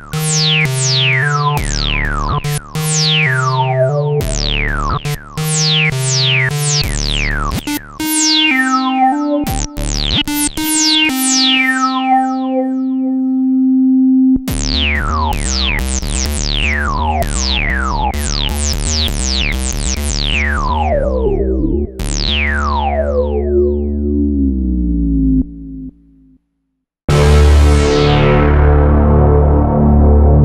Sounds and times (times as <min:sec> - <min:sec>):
Synthesizer: 0:00.0 - 0:24.7, 0:27.1 - 0:30.4.